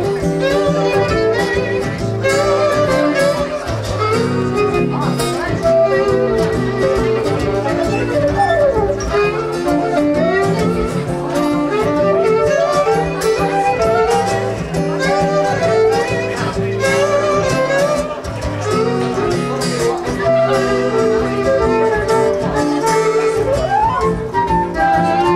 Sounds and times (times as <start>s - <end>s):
Speech: 0.0s - 25.3s
Strum: 0.0s - 25.3s
Violin, fiddle: 0.0s - 25.3s.